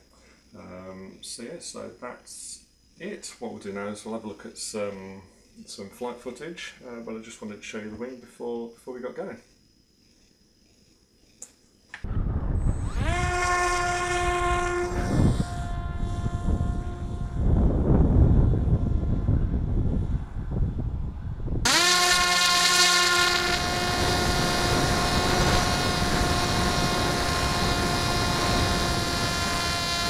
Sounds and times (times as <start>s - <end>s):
Speech: 0.6s - 9.4s.